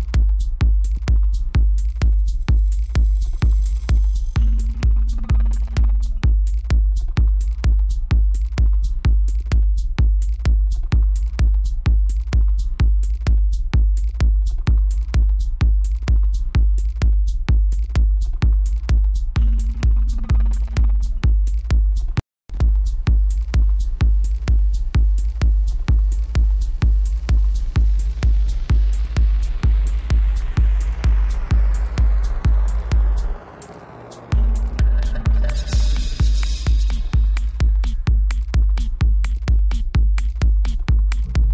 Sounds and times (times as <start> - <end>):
Music: 0.0 - 41.5.